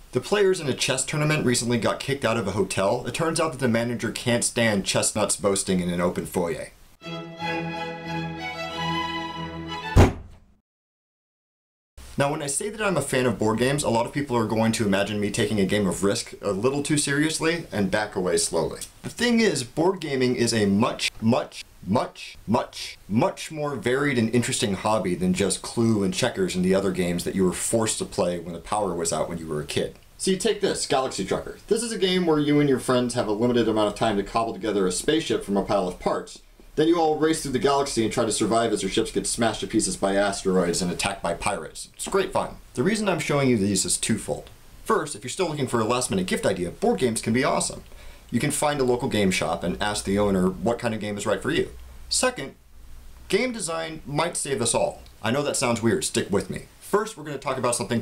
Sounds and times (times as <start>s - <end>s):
Speech: 0.1s - 6.8s, 12.2s - 52.6s, 53.3s - 58.0s.